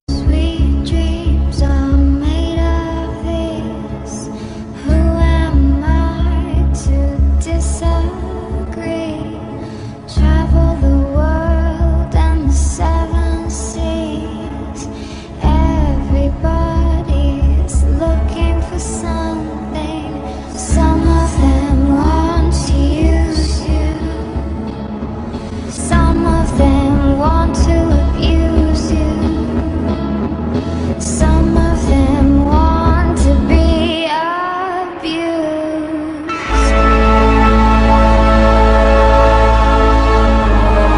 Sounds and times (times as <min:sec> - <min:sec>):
Independent music: 0:00.0 - 0:40.9.